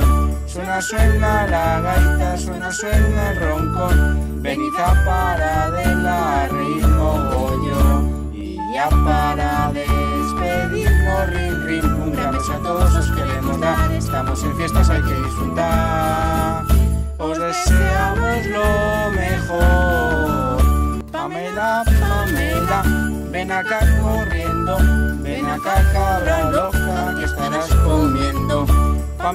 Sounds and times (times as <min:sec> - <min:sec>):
Music for children: 0:00.0 - 0:29.3.